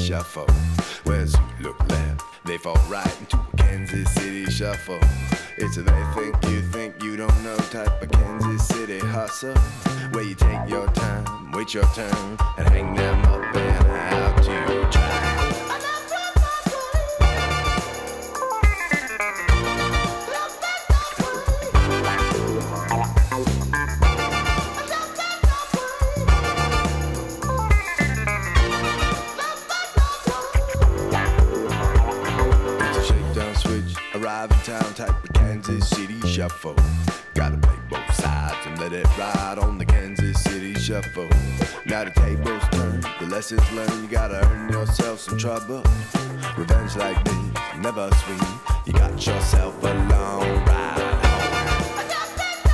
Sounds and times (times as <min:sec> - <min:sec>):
Music: 0:00.0 - 0:52.7.